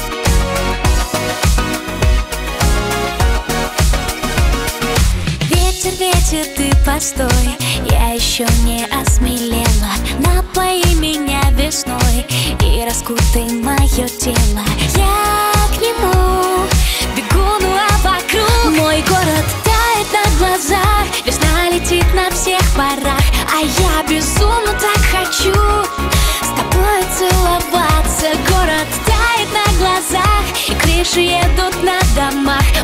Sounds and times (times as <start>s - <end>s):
Exciting music: 0.0s - 7.6s, 13.3s - 32.8s.